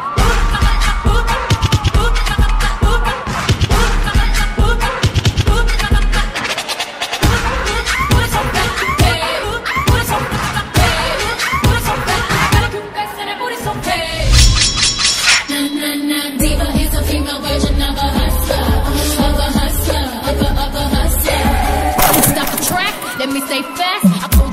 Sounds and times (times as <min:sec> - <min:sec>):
Music: 0:00.0 - 0:24.5.